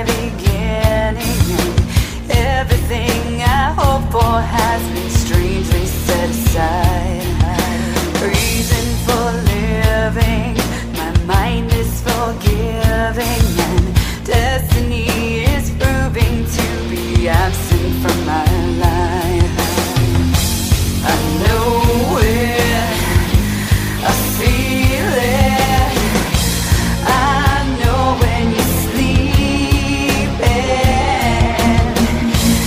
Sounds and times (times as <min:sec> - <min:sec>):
Music: 0:00.0 - 0:32.6.